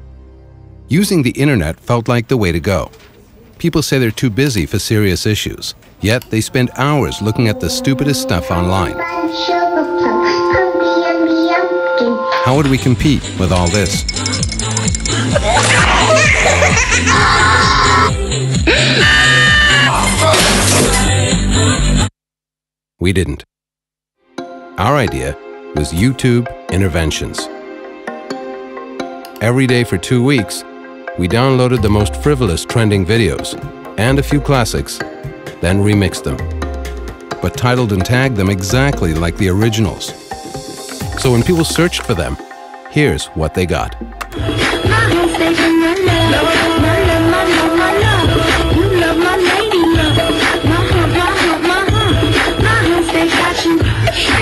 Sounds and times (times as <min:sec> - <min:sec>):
Music: 0:00.0 - 0:01.5, 0:06.0 - 0:22.1, 0:24.2 - 0:54.4
Speech: 0:00.9 - 0:03.0, 0:03.6 - 0:09.3, 0:12.0 - 0:14.0, 0:23.0 - 0:23.5, 0:24.8 - 0:27.5, 0:29.4 - 0:35.0, 0:35.6 - 0:36.4, 0:37.4 - 0:40.2, 0:41.2 - 0:44.0.